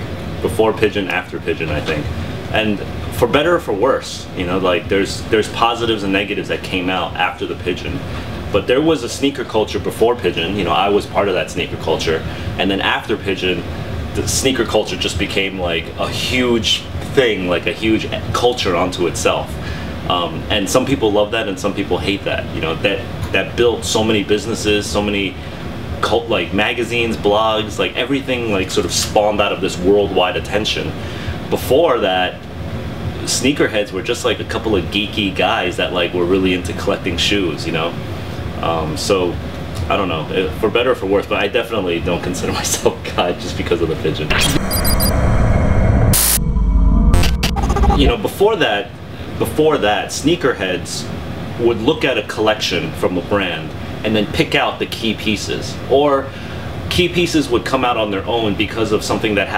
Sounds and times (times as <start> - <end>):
Speech: 0.0 - 25.4, 26.0 - 32.5, 33.1 - 38.0, 38.6 - 44.6, 47.9 - 59.5.